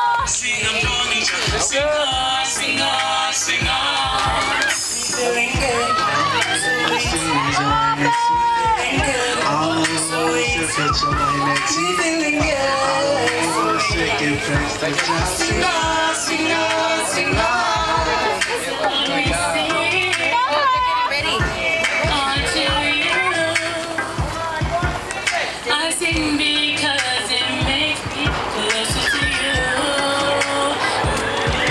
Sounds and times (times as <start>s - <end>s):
Choir: 0.0s - 24.4s, 25.8s - 31.7s
Female singing: 0.0s - 24.8s, 25.7s - 31.7s
Male singing: 0.0s - 31.7s
Speech: 4.2s - 31.7s.